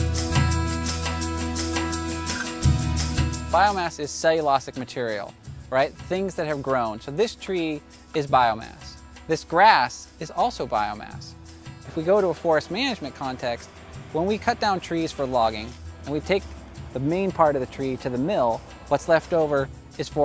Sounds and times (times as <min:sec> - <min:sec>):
Music: 0:00.0 - 0:20.2
Speech: 0:03.5 - 0:11.3, 0:11.9 - 0:20.2.